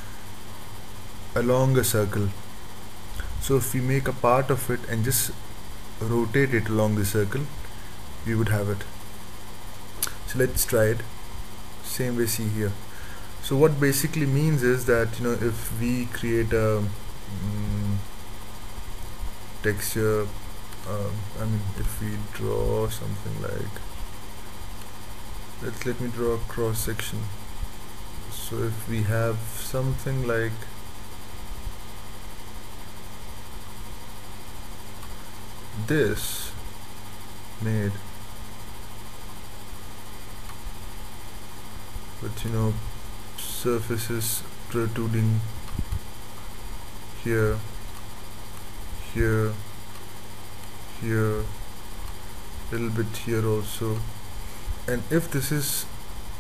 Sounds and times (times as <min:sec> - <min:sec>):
Speech: 0:01.4 - 0:02.4, 0:03.4 - 0:05.4, 0:06.0 - 0:07.6, 0:08.2 - 0:08.9, 0:10.0 - 0:11.1, 0:11.8 - 0:12.8, 0:13.4 - 0:18.0, 0:19.6 - 0:23.8, 0:25.6 - 0:27.4, 0:28.3 - 0:30.7, 0:35.8 - 0:36.6, 0:37.6 - 0:38.0, 0:42.2 - 0:42.8, 0:43.4 - 0:45.5, 0:47.2 - 0:47.7, 0:49.0 - 0:49.6, 0:50.9 - 0:51.6, 0:52.7 - 0:54.1, 0:54.9 - 0:55.9.